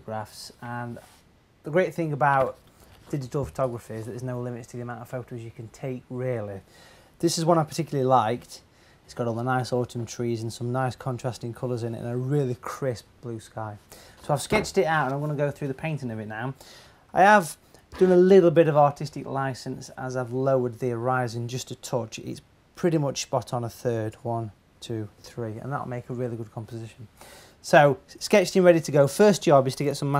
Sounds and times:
Speech: 0.0 - 30.1.

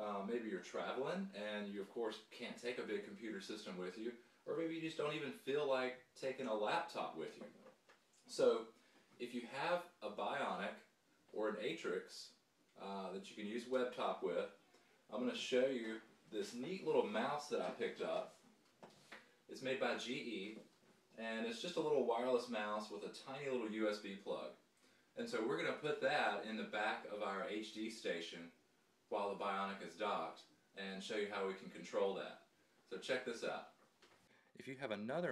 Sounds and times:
Speech: 0.0 - 7.6, 8.3 - 18.3, 19.5 - 20.6, 21.2 - 24.6, 25.2 - 33.8, 34.6 - 35.3.

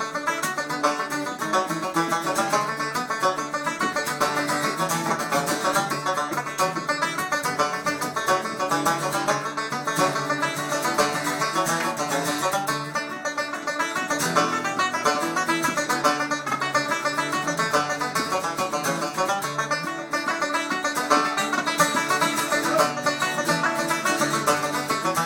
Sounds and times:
Bluegrass: 0.0 - 25.2.

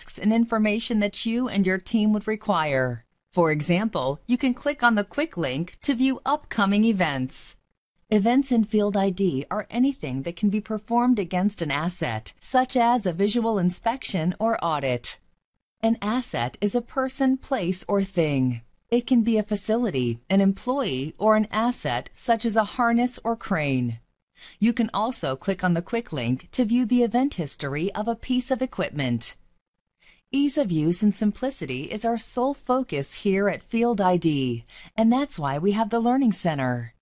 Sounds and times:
Speech: 0.0 - 15.2, 15.8 - 24.0, 24.6 - 29.4, 30.4 - 37.0.

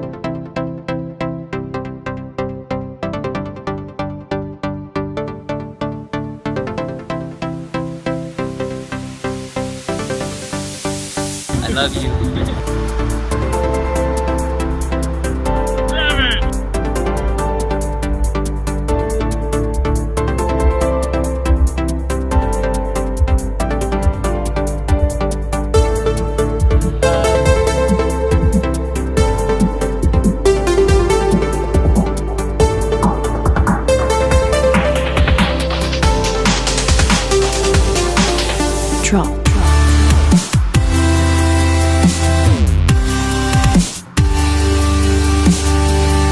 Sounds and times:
Drum and bass: 7.8 - 46.3.

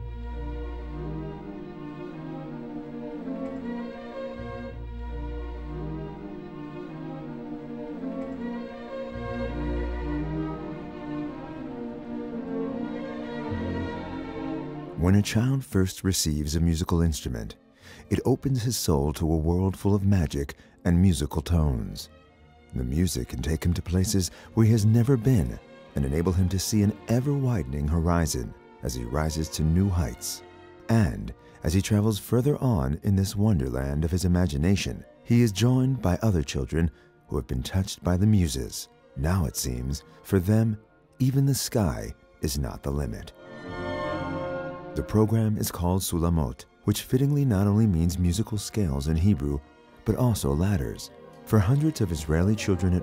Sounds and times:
Music: 0.0 - 53.0
Speech: 15.0 - 22.1, 22.7 - 43.3, 45.0 - 53.0.

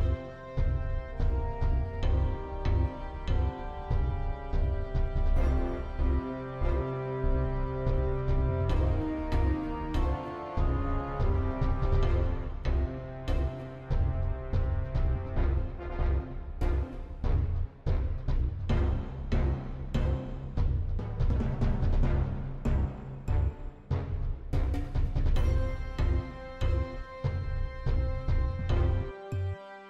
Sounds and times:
Music: 0.0 - 29.9.

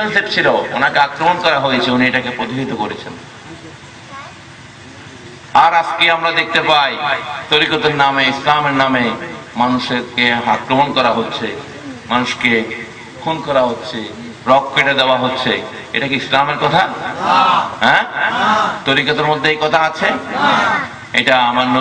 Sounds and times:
Male speech, man speaking: 0.0 - 3.2, 5.6 - 17.2, 17.8 - 20.6, 21.2 - 21.8
Narration, monologue: 0.0 - 21.8.

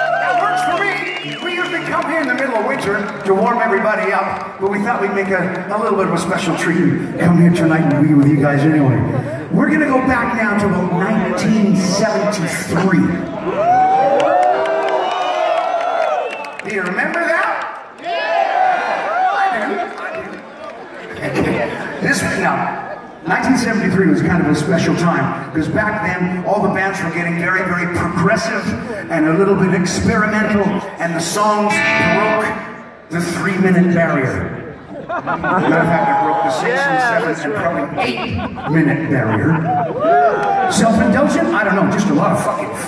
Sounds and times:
Male speech, man speaking: 0.2 - 13.3, 16.6 - 17.7, 21.1 - 34.6, 35.6 - 39.7, 40.7 - 42.8
Narration, monologue: 0.6 - 13.3, 21.2 - 34.6.

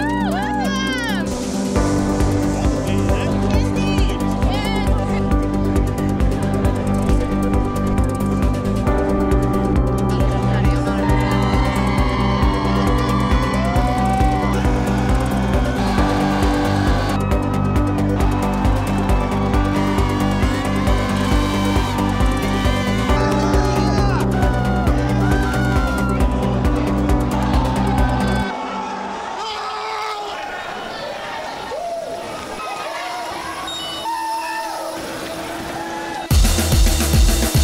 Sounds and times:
Music: 0.0 - 29.7, 35.2 - 37.6.

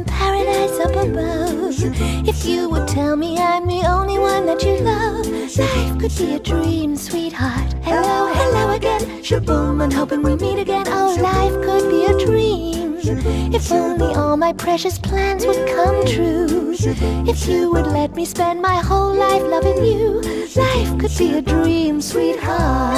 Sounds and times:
Music for children: 0.0 - 22.9.

